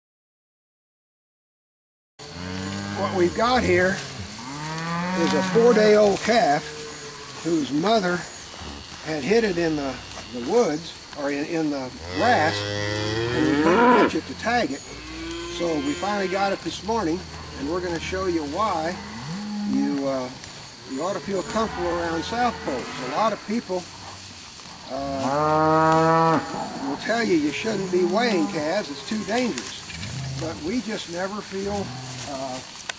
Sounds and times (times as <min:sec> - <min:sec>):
Moo: 0:04.4 - 0:06.0, 0:12.0 - 0:14.2, 0:15.0 - 0:16.6, 0:19.0 - 0:19.9, 0:25.0 - 0:29.4.